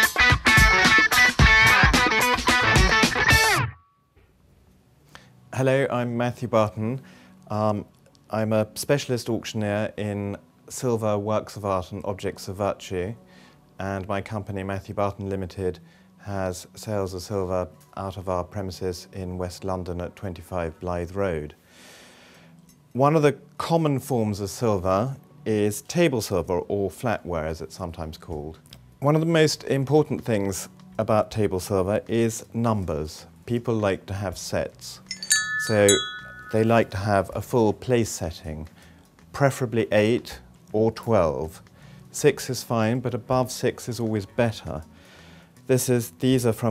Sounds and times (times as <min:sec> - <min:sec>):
Music: 0:00.0 - 0:46.7
Speech: 0:05.6 - 0:13.2, 0:13.8 - 0:21.6, 0:23.0 - 0:35.0, 0:35.6 - 0:38.7, 0:39.3 - 0:44.9, 0:45.7 - 0:46.7.